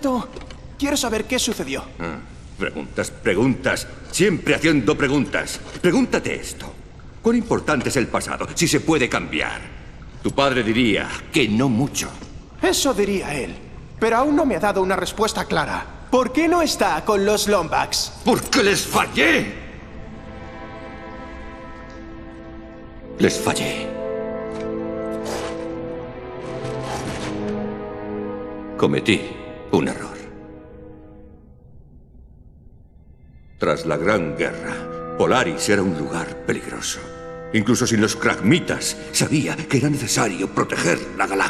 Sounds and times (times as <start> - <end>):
Speech: 0.0 - 19.6, 23.2 - 23.9, 33.6 - 41.4
Music: 0.0 - 41.4.